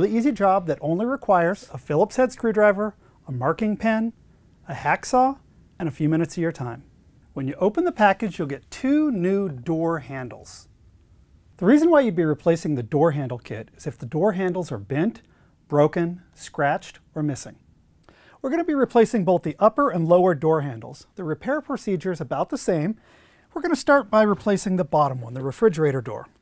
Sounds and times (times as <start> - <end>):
Speech: 0.0 - 10.7, 11.6 - 17.6, 18.4 - 26.4.